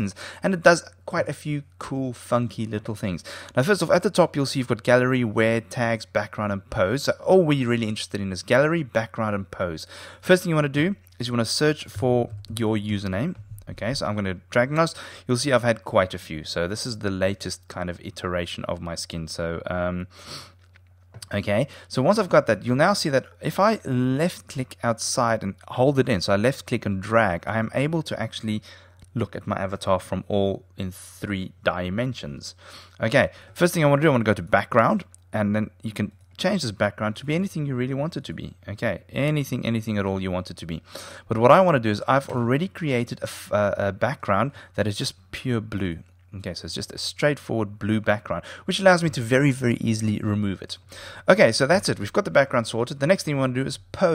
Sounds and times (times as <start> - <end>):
Speech: 0.0 - 20.1, 21.2 - 54.1.